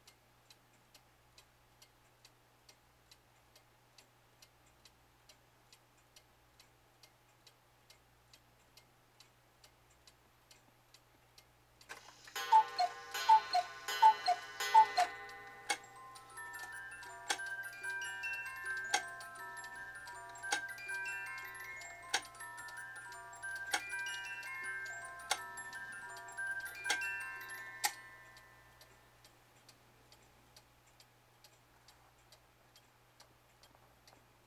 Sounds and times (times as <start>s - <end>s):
Tick: 0.0s - 12.0s, 18.9s - 20.7s, 22.1s - 22.4s.